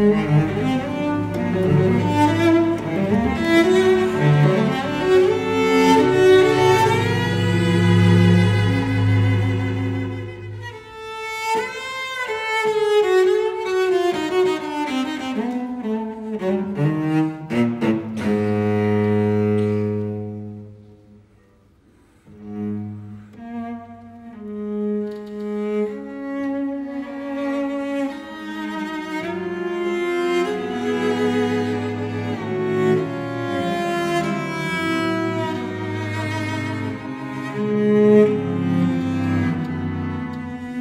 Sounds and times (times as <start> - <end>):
Double bass: 0.0 - 11.0, 14.5 - 21.3, 22.2 - 40.8
Cello: 0.0 - 40.8.